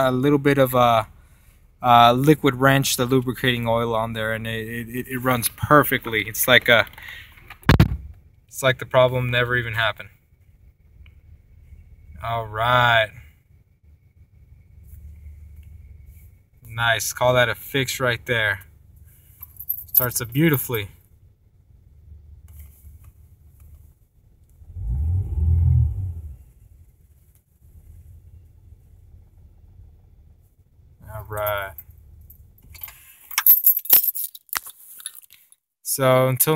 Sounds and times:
Speech: 0:00.0 - 0:01.1, 0:01.8 - 0:06.9, 0:08.5 - 0:10.2, 0:12.2 - 0:13.2, 0:16.6 - 0:18.7, 0:20.0 - 0:21.0, 0:31.0 - 0:31.8, 0:35.8 - 0:36.5.

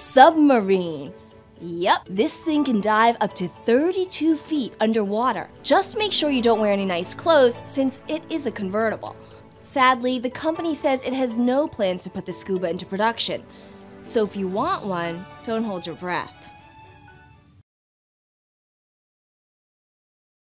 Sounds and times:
Speech: 0:00.0 - 0:13.4, 0:14.1 - 0:16.5
Music: 0:00.0 - 0:17.6.

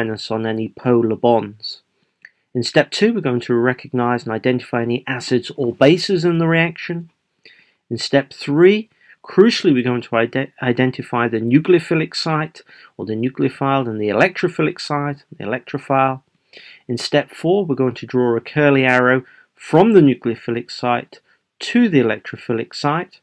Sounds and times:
Speech: 0:00.0 - 0:01.8, 0:02.6 - 0:07.1, 0:07.9 - 0:23.2.

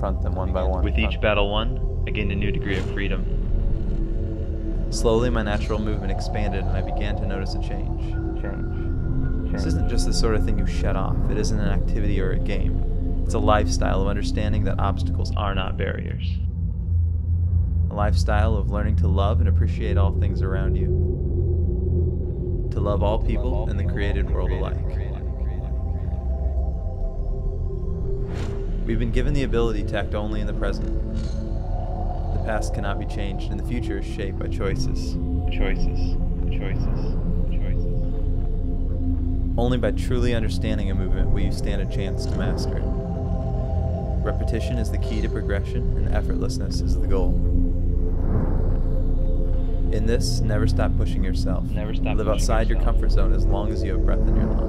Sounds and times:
Speech: 0:00.0 - 0:03.3, 0:04.9 - 0:08.8, 0:09.5 - 0:16.4, 0:17.9 - 0:20.9, 0:22.8 - 0:26.2, 0:28.9 - 0:31.0, 0:32.4 - 0:37.8, 0:39.6 - 0:43.0, 0:44.2 - 0:47.4, 0:49.9 - 0:54.6
Music: 0:00.0 - 0:54.6.

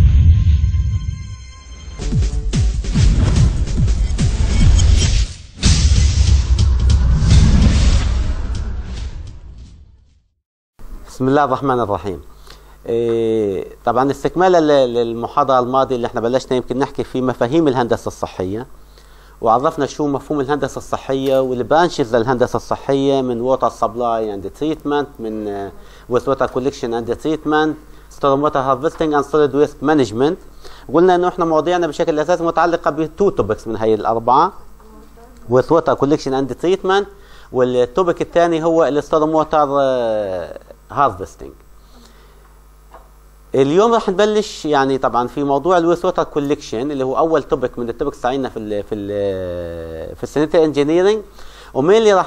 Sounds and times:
Speech: 0:11.1 - 0:18.7, 0:19.4 - 0:41.6, 0:43.5 - 0:52.2.

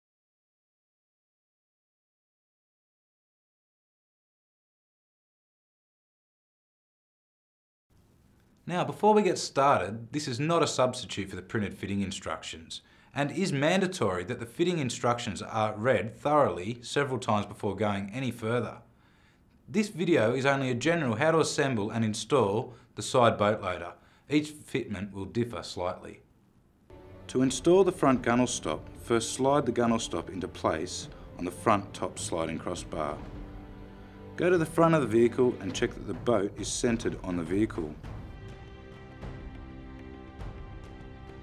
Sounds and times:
Speech: 0:08.6 - 0:18.9, 0:19.7 - 0:26.3, 0:27.3 - 0:33.3, 0:34.4 - 0:38.0
Music: 0:26.9 - 0:41.4.

